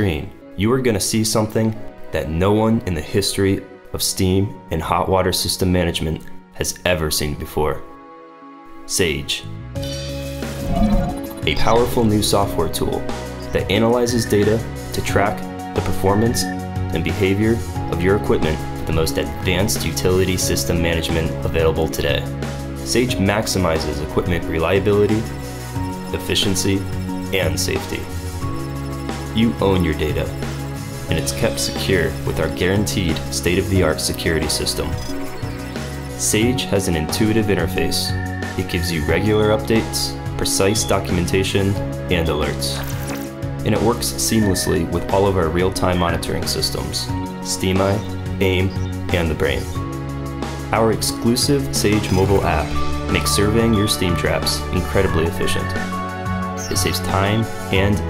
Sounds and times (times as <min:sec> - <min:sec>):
Speech: 0:00.0 - 0:07.9, 0:08.9 - 0:09.6, 0:11.5 - 0:22.3, 0:22.9 - 0:25.3, 0:26.1 - 0:28.1, 0:29.4 - 0:30.4, 0:31.1 - 0:35.1, 0:36.2 - 0:42.8, 0:43.6 - 0:49.8, 0:50.7 - 0:55.9, 0:56.7 - 0:58.1
Music: 0:00.0 - 0:58.1.